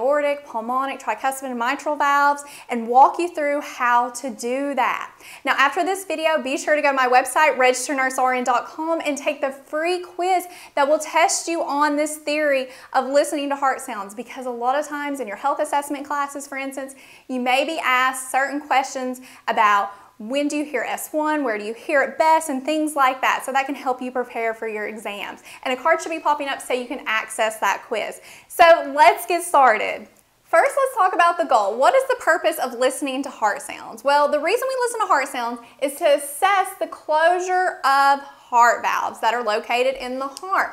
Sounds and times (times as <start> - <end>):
Speech: 0.0 - 40.7.